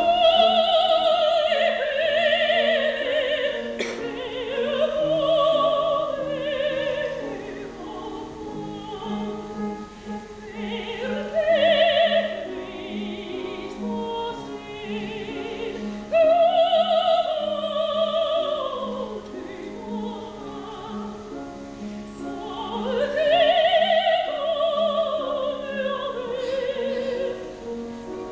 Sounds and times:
Singing: 0.0s - 21.3s, 22.1s - 27.5s
Opera: 0.0s - 28.3s.

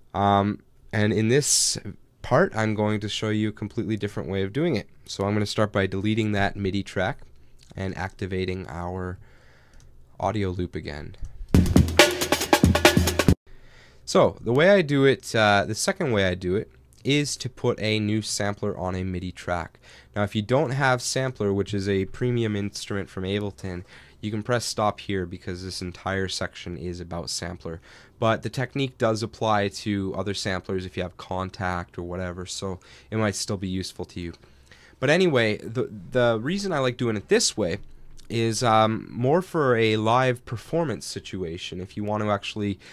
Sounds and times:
Speech: 0.1s - 9.2s, 10.2s - 11.2s, 14.1s - 34.4s, 35.0s - 42.8s.

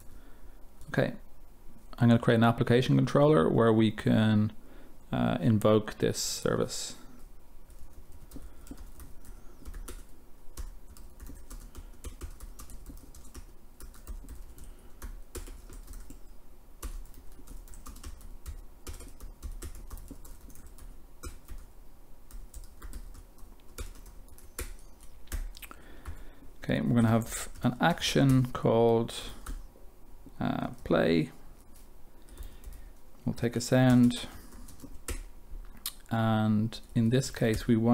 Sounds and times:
Speech: 0.9s - 1.3s, 2.0s - 7.1s, 26.6s - 29.4s, 30.4s - 31.4s, 33.2s - 34.4s, 36.1s - 37.9s.

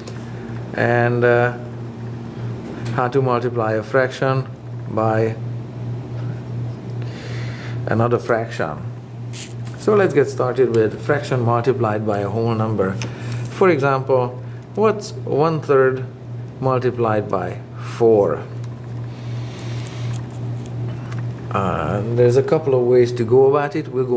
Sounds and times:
Speech: 0.8s - 1.7s, 2.9s - 5.4s, 7.9s - 8.9s, 9.8s - 18.6s, 21.5s - 24.1s.

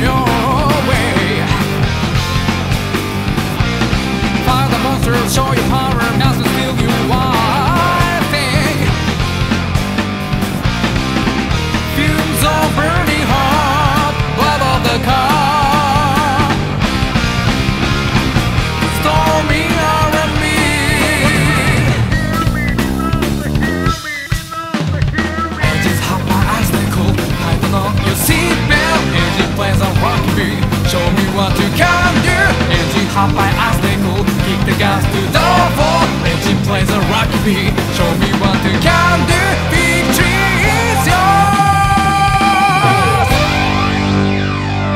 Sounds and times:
Jazz: 0.0s - 44.9s
Soundtrack music: 0.0s - 44.9s.

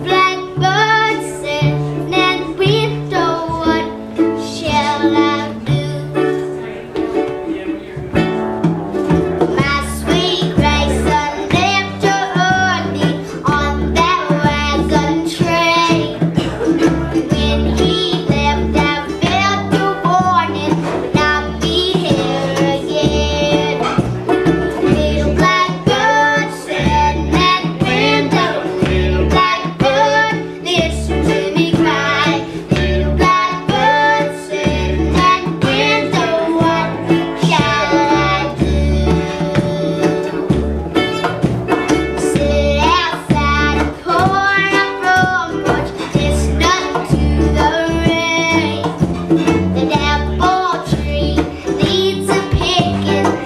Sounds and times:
Music: 0.0s - 53.4s.

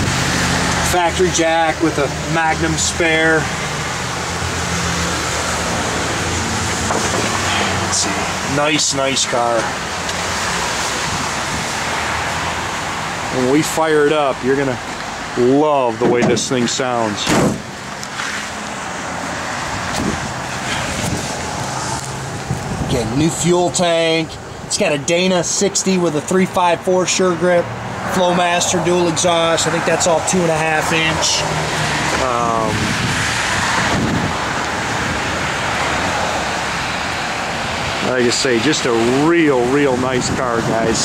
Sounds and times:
Outside, urban or manmade: 0.0s - 41.0s
Vehicle: 0.0s - 41.0s
Speech: 0.8s - 3.5s, 7.5s - 9.7s, 13.3s - 14.8s, 15.4s - 17.4s, 22.9s - 31.5s, 32.2s - 32.8s, 38.0s - 41.0s.

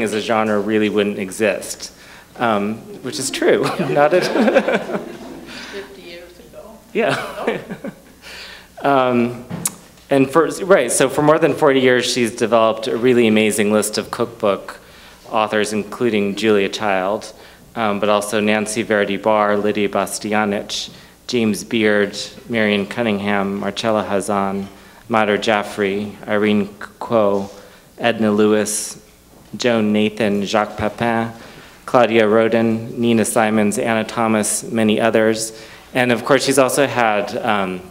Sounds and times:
Speech: 0.0s - 4.6s, 8.8s - 9.5s, 10.1s - 37.9s.

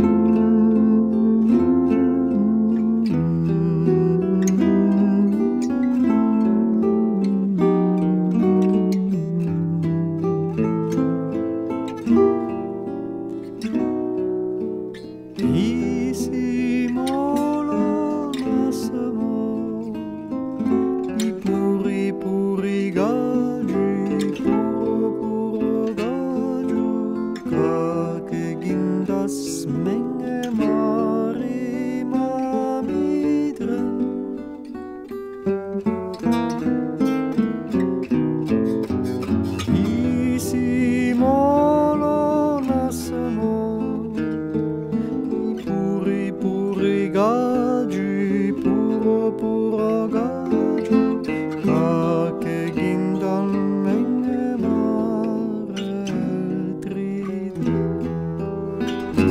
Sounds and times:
Lullaby: 0.0s - 12.5s, 15.0s - 35.1s, 38.8s - 44.4s.

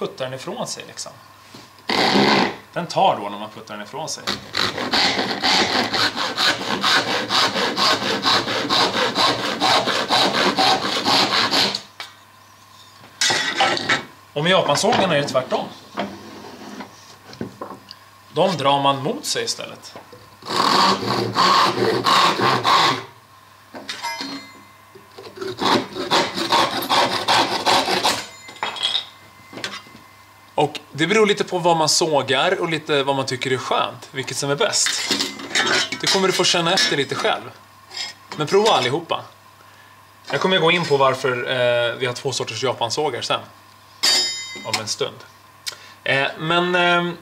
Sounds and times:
Sawing: 1.9s - 2.6s, 4.3s - 11.9s, 20.4s - 23.1s, 25.3s - 28.3s.

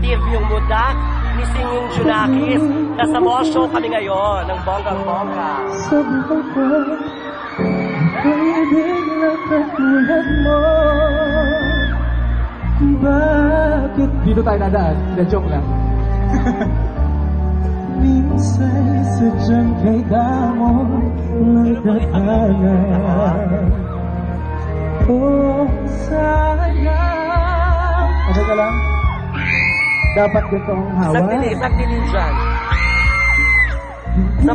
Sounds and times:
Music: 0.0s - 34.5s
Male singing: 4.9s - 7.3s, 8.0s - 15.7s, 17.8s - 24.0s, 25.0s - 29.0s, 33.8s - 34.5s.

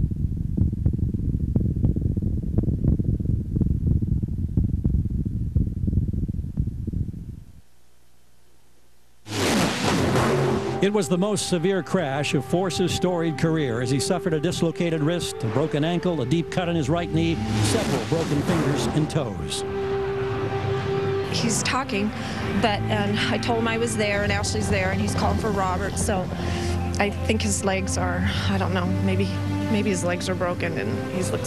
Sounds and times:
Silence: 0.0s - 10.8s
Outside, urban or manmade: 0.0s - 31.4s
Speech: 10.8s - 19.6s, 21.3s - 26.3s, 27.0s - 31.4s.

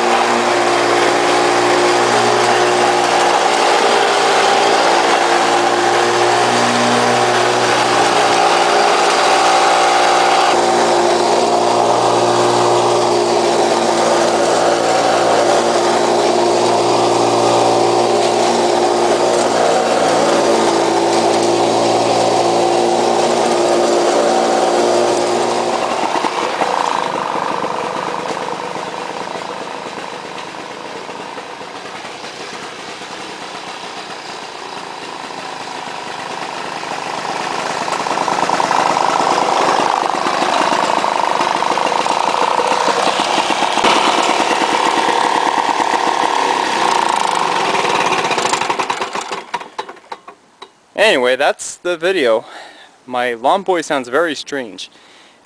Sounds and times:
Lawn mower: 0.0s - 51.0s.

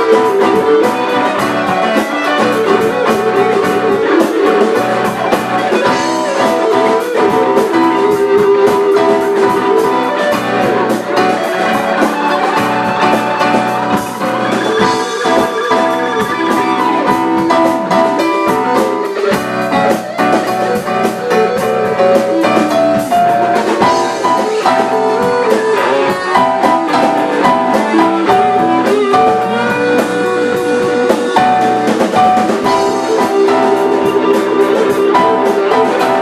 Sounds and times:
Acoustic guitar: 0.0s - 36.2s
Strum: 0.0s - 36.2s.

